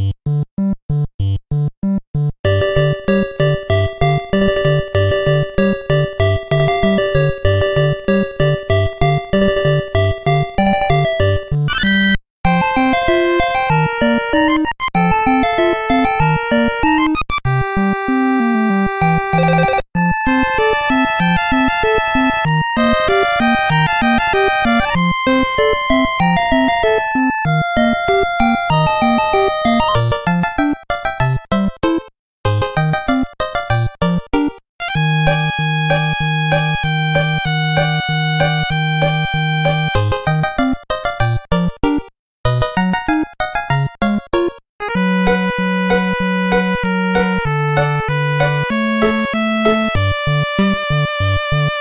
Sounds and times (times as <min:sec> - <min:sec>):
Music: 0:00.0 - 0:51.8.